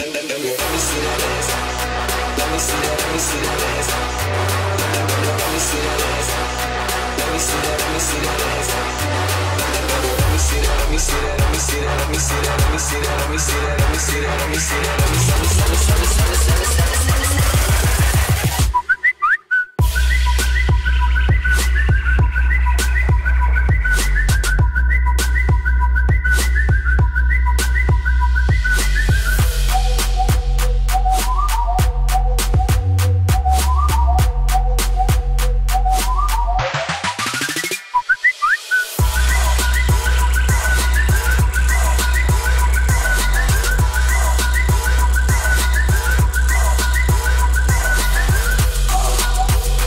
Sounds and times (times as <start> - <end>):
Music: 0.0 - 19.2, 19.8 - 49.8.